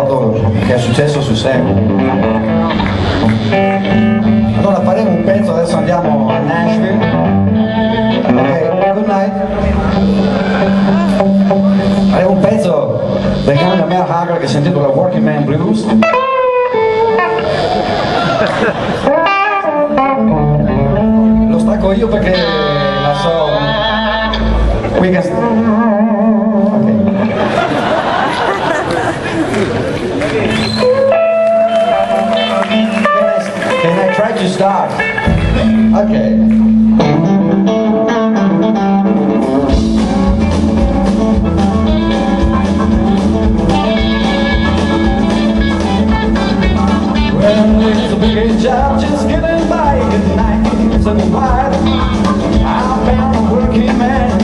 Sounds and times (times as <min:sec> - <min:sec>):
Speech: 0:00.0 - 0:01.8, 0:12.1 - 0:15.9, 0:21.5 - 0:23.7, 0:33.8 - 0:35.0, 0:35.9 - 0:36.5
Blues: 0:00.0 - 0:54.4.